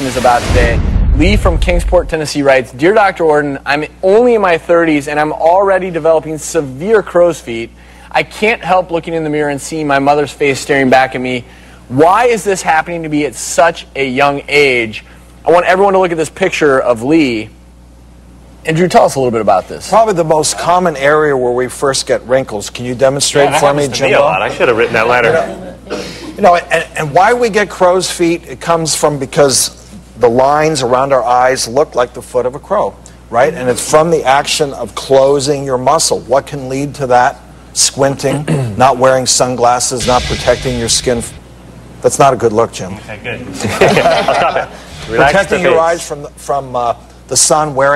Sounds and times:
Speech: 0:00.0 - 0:17.6, 0:18.6 - 0:25.8, 0:26.4 - 0:41.4, 0:42.0 - 0:44.1, 0:45.0 - 0:47.9.

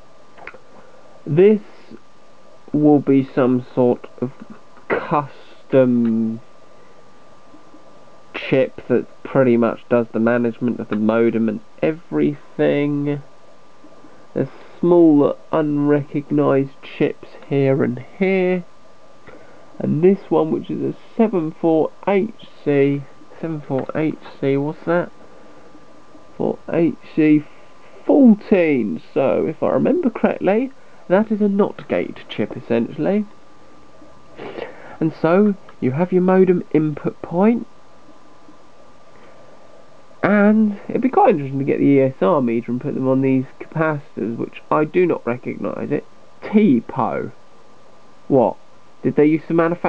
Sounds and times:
Narration, monologue: 0:00.0 - 0:49.8.

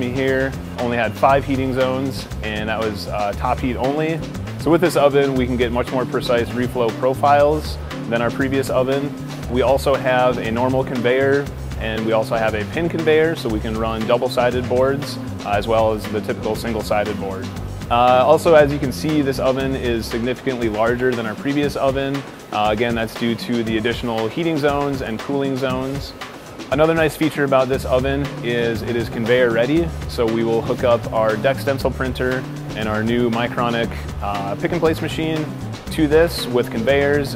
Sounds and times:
Music: 0:00.0 - 0:37.3
Speech: 0:00.0 - 0:37.3.

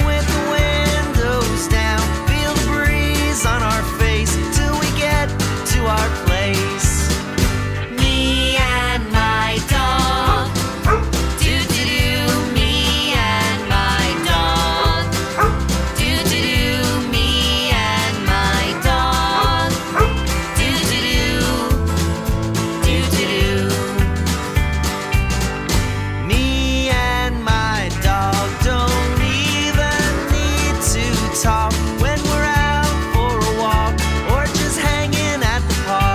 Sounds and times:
Music: 0:00.0 - 0:36.1.

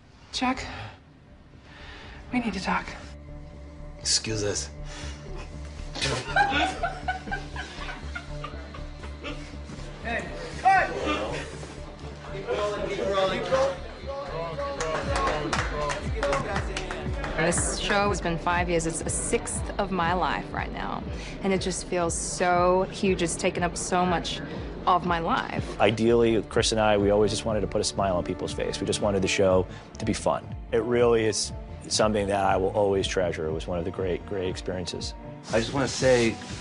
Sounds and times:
Laughter: 0:06.0 - 0:09.5.

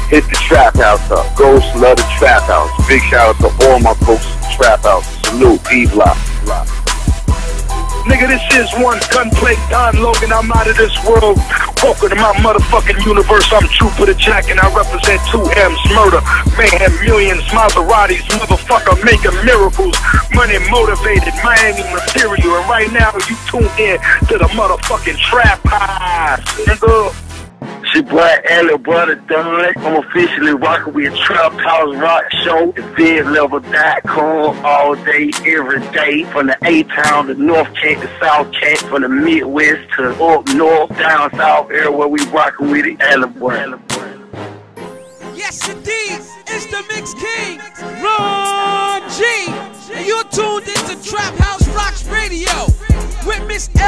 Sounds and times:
Music: 0:00.0 - 0:53.8.

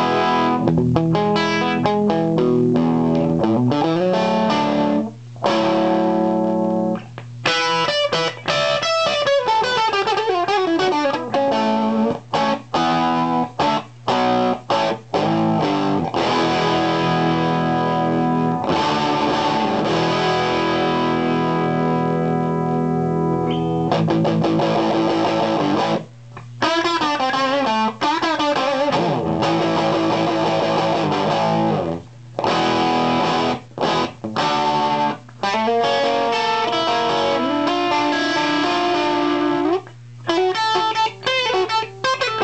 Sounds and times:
Music: 0:00.0 - 0:42.4.

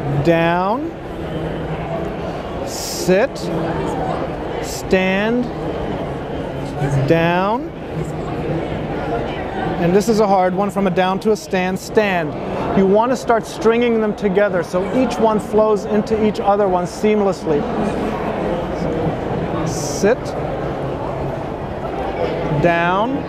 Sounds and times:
Speech: 0:00.1 - 0:01.0, 0:02.6 - 0:03.5, 0:04.6 - 0:05.5, 0:06.8 - 0:07.7, 0:09.8 - 0:17.7, 0:19.6 - 0:20.4, 0:22.5 - 0:23.2.

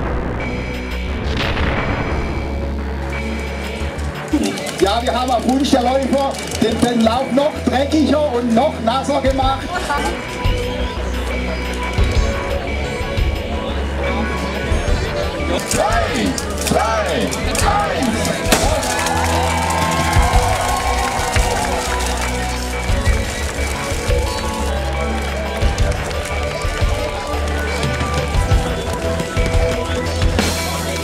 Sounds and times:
Music: 0:00.0 - 0:31.0
Speech: 0:04.3 - 0:10.2, 0:13.8 - 0:18.5.

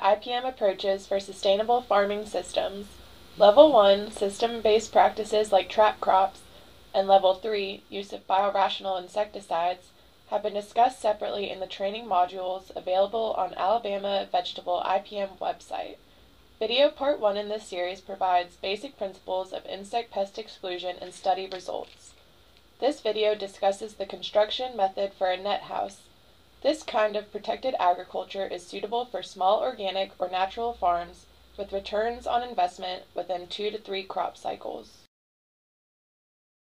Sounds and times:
Speech: 0:00.0 - 0:16.0, 0:16.6 - 0:22.2, 0:22.8 - 0:35.1.

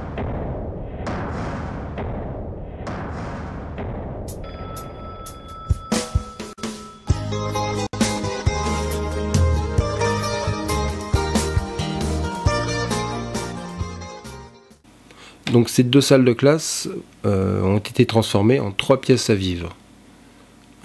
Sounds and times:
Music: 0:05.7 - 0:14.8
Speech: 0:15.5 - 0:19.8.

